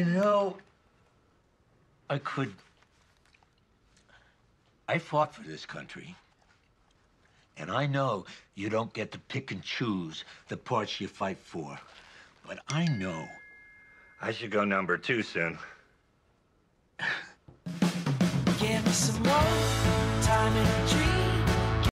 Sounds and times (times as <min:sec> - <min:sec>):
Speech: 0:00.0 - 0:00.7, 0:02.1 - 0:02.7, 0:04.9 - 0:06.3, 0:07.6 - 0:13.4, 0:14.2 - 0:15.8.